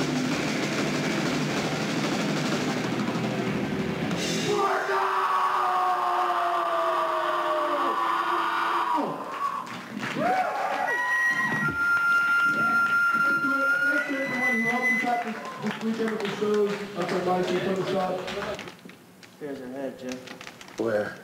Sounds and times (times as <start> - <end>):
Male speech, man speaking: 13.2 - 18.6, 19.4 - 20.2, 20.8 - 21.2.